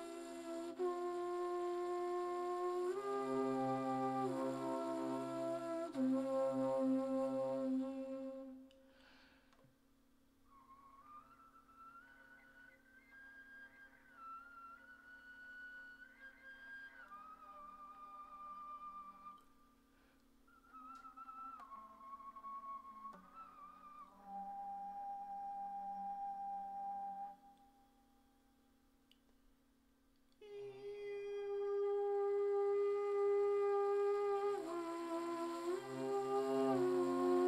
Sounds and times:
Music: 0.0 - 9.1, 9.8 - 37.4.

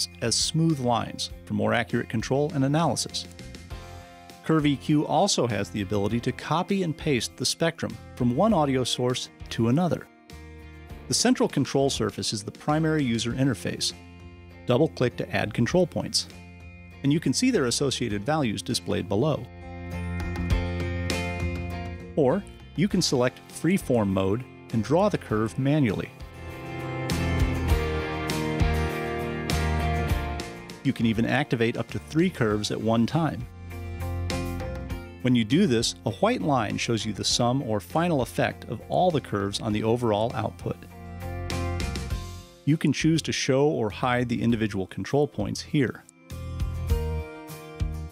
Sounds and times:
Speech: 0.0 - 3.3, 4.5 - 10.1, 11.1 - 14.0, 14.7 - 16.3, 17.0 - 19.5, 22.2 - 26.2, 30.9 - 33.5, 35.2 - 40.9, 42.7 - 46.1
Music: 0.0 - 48.1.

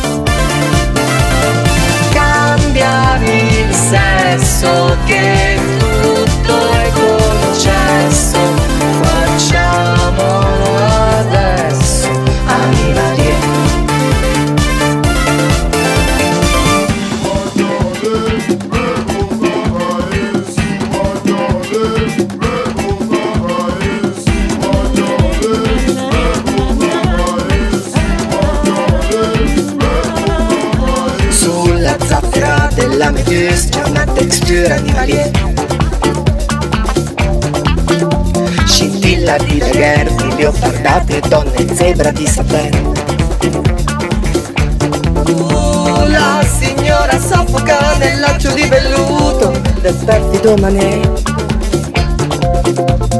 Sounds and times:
Afrobeat: 0.0 - 53.2.

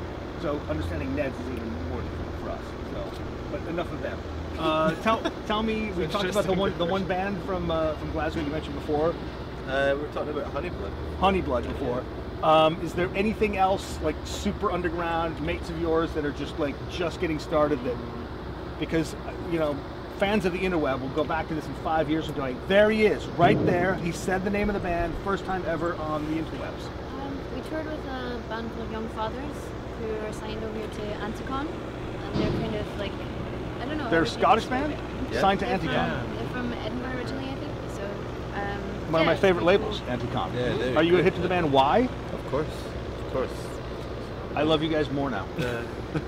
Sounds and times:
Vehicle: 0.0 - 46.2
Speech: 0.4 - 9.1, 18.8 - 33.2, 33.8 - 42.8.

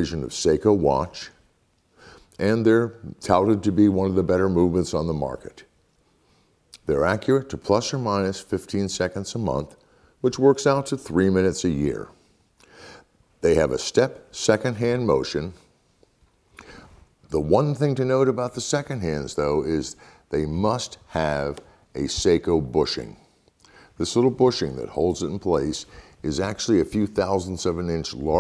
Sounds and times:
Speech: 0.0 - 1.4, 2.4 - 5.7, 6.8 - 12.2, 13.4 - 15.7, 17.3 - 23.3, 24.0 - 28.4.

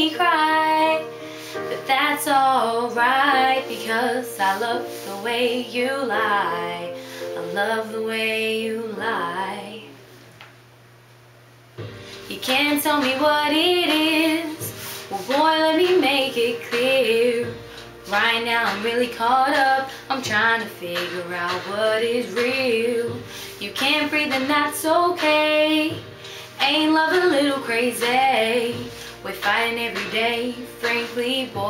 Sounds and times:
Female singing: 0.0 - 1.1, 1.7 - 10.0, 12.3 - 31.6
Music: 0.0 - 10.1, 11.8 - 31.6.

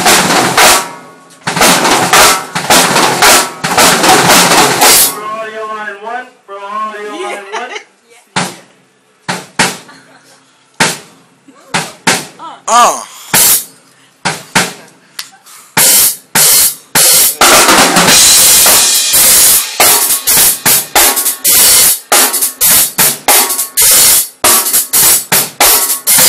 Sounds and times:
Drum: 0.0 - 5.3, 8.4 - 9.9, 10.8 - 13.7, 15.8 - 26.2
Speech: 5.2 - 8.7, 12.4 - 13.1.

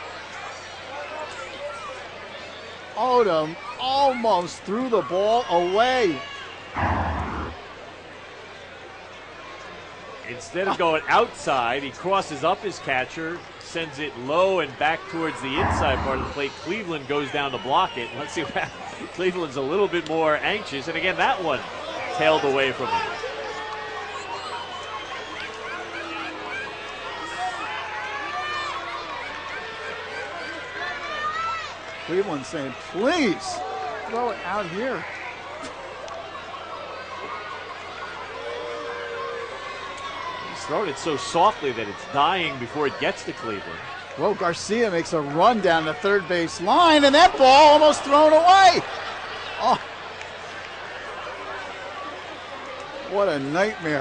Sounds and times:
Speech: 10.2 - 23.2, 40.5 - 48.9.

